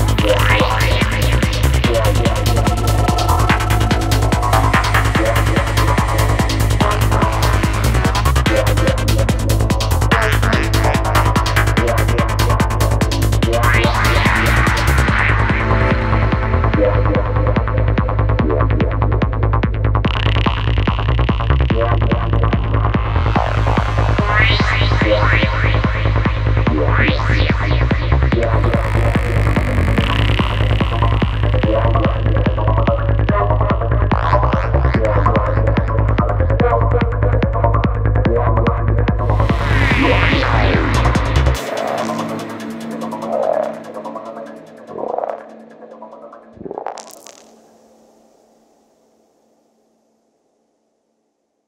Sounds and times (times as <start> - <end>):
Trance music: 0.0 - 48.0.